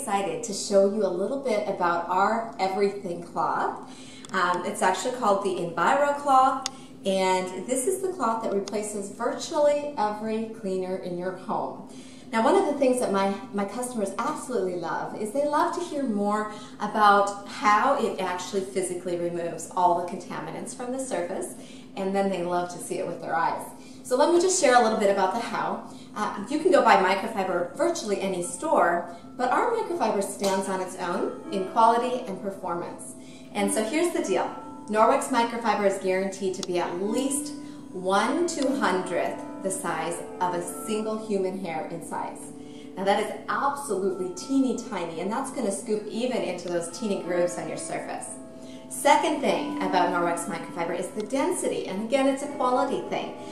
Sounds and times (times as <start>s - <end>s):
Speech: 0.0s - 53.3s.